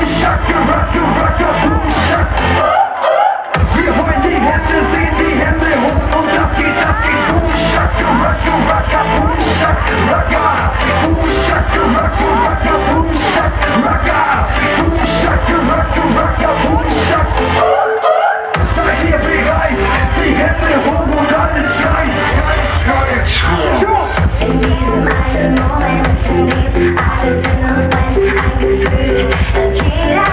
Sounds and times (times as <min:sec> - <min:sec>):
Crowd: 0:00.0 - 0:30.3
Music: 0:00.0 - 0:30.3
Singing: 0:00.0 - 0:30.3.